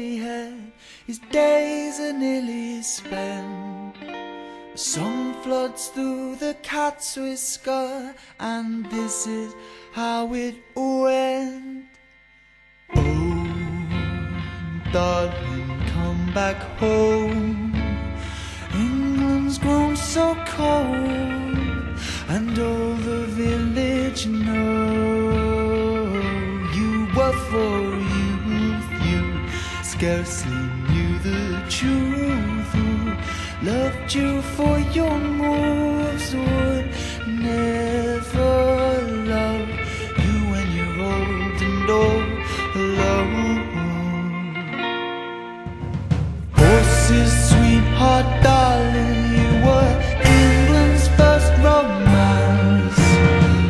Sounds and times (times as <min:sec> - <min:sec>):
Music: 0:00.0 - 0:53.6.